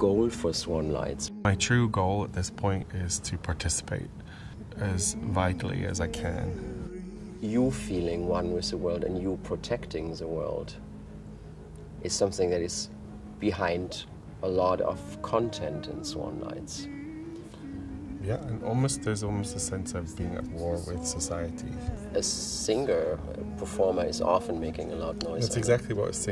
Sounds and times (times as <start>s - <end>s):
Speech: 0.0s - 4.1s, 4.7s - 6.6s, 7.4s - 10.8s, 12.0s - 16.9s, 18.2s - 26.3s
Music: 0.0s - 26.3s.